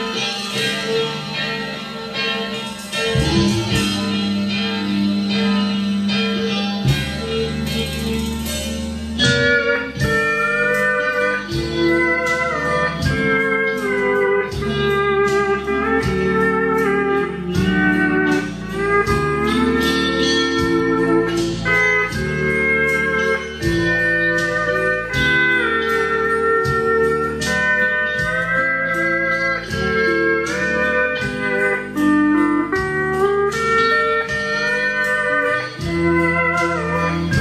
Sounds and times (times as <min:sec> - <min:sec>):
Steel guitar, slide guitar: 0:00.0 - 0:37.4.